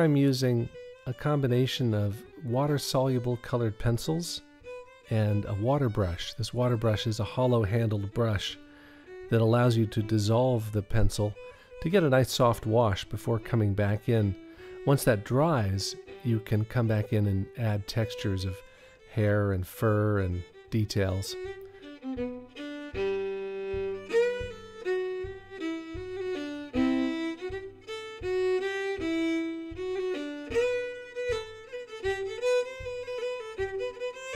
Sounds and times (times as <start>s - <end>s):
Speech: 0.0s - 4.4s, 5.1s - 8.6s, 9.3s - 21.5s
Music: 0.0s - 34.3s.